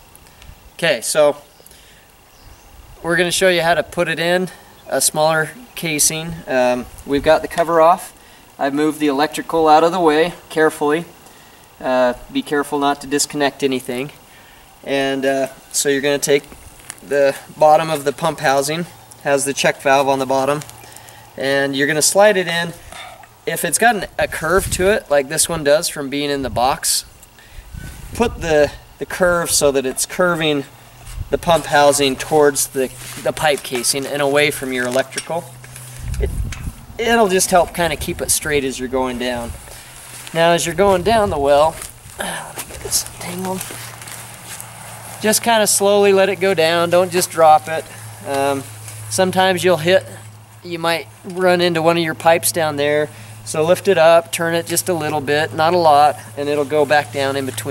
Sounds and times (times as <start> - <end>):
Speech: 0.8 - 1.4, 3.0 - 11.1, 11.8 - 14.2, 14.8 - 20.7, 21.4 - 22.8, 23.5 - 27.1, 28.2 - 30.7, 31.3 - 35.5, 37.0 - 39.6, 40.3 - 43.7, 45.2 - 57.7.